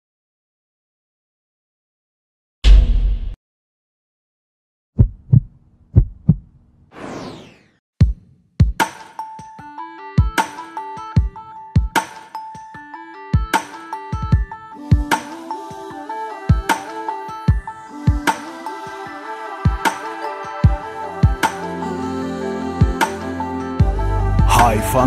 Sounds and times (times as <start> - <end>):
Music: 8.0 - 25.0.